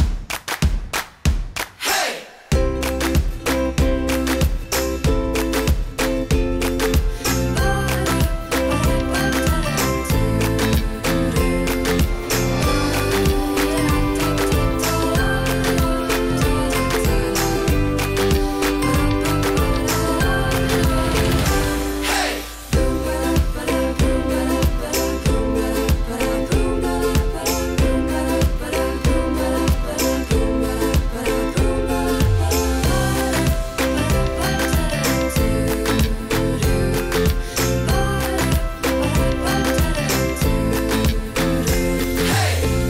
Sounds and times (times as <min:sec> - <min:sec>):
Music: 0:00.0 - 0:42.8.